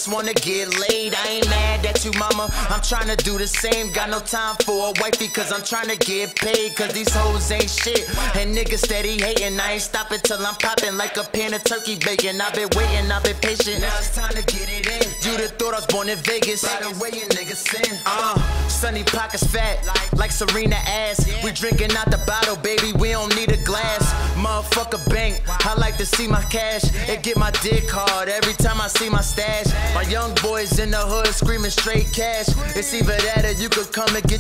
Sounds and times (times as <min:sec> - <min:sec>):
Dance music: 0:00.0 - 0:34.4.